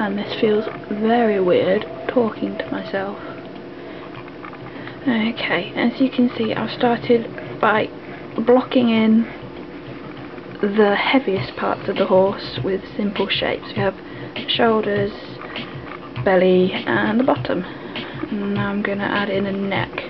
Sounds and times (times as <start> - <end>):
Speech: 0.0 - 3.3, 5.0 - 9.3, 10.6 - 15.4, 16.2 - 17.7, 18.3 - 20.1
Music: 0.0 - 20.1.